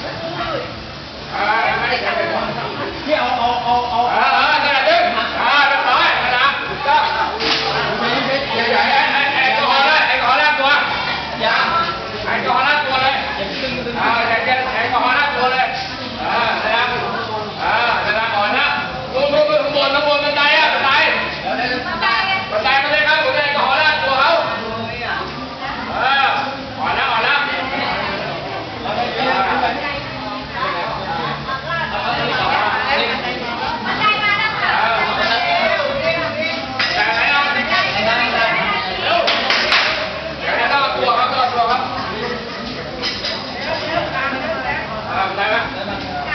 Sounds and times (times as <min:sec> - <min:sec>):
Inside, public space: 0:00.0 - 0:46.3.